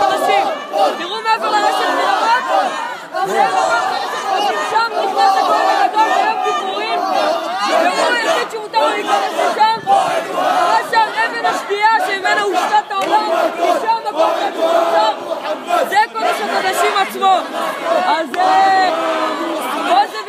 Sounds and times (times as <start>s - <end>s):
Outside, urban or manmade: 0.0s - 20.2s
Speech: 0.0s - 20.2s.